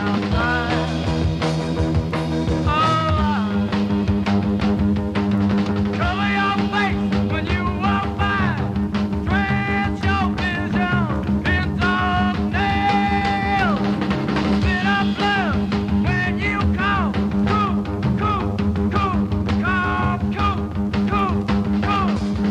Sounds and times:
Music: 0:00.0 - 0:22.5.

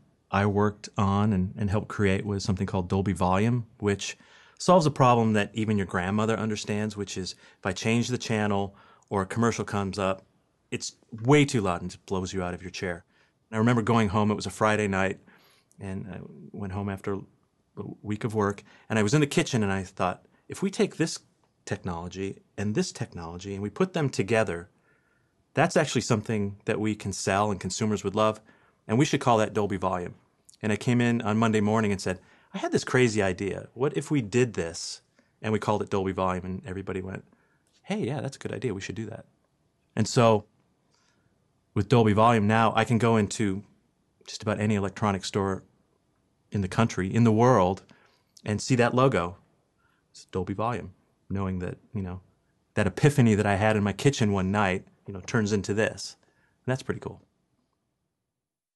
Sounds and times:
Speech: 0:00.3 - 0:15.2, 0:15.8 - 0:24.7, 0:25.6 - 0:39.3, 0:40.0 - 0:40.5, 0:41.8 - 0:43.7, 0:44.3 - 0:45.7, 0:46.5 - 0:49.4, 0:50.2 - 0:52.2, 0:52.8 - 0:57.3.

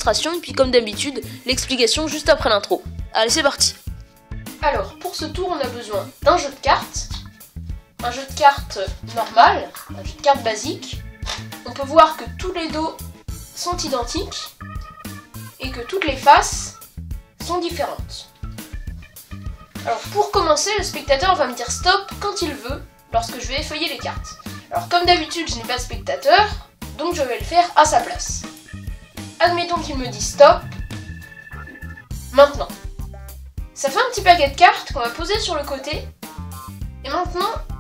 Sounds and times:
Speech: 0:00.0 - 0:03.8, 0:04.6 - 0:07.2, 0:08.0 - 0:11.0, 0:11.6 - 0:13.0, 0:13.6 - 0:14.5, 0:15.6 - 0:16.8, 0:17.4 - 0:18.3, 0:19.8 - 0:28.5, 0:29.4 - 0:30.8, 0:32.4 - 0:32.8, 0:33.8 - 0:36.1, 0:37.0 - 0:37.7
Music: 0:00.0 - 0:37.8.

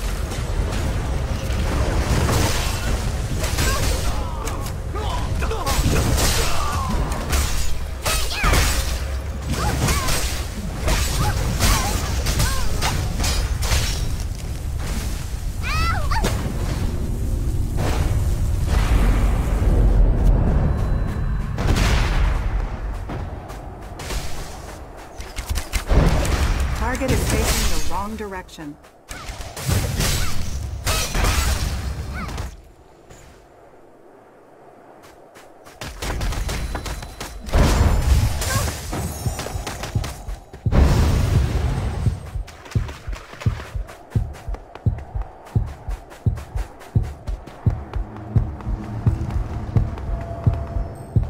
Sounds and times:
Speech: 0:26.8 - 0:28.8.

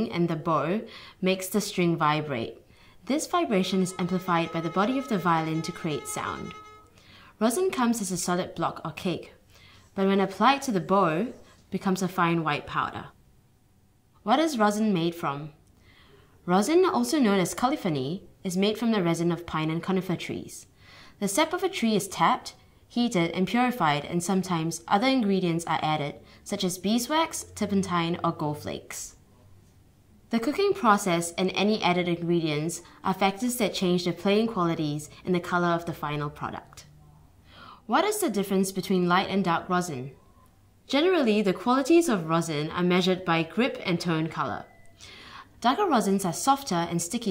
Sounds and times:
Speech: 0:00.0 - 0:06.6, 0:07.4 - 0:09.4, 0:10.0 - 0:13.2, 0:14.2 - 0:15.6, 0:16.5 - 0:29.2, 0:30.3 - 0:37.0, 0:37.9 - 0:40.2, 0:40.9 - 0:44.8, 0:45.6 - 0:47.3.

